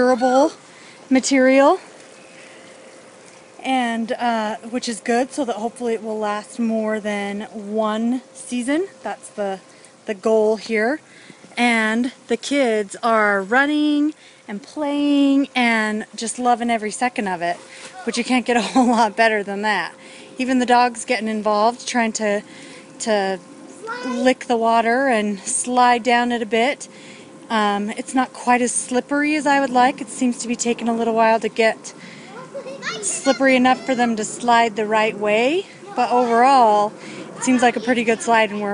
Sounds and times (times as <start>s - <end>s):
Speech: 3.6s - 11.0s, 11.6s - 22.4s, 27.5s - 38.7s.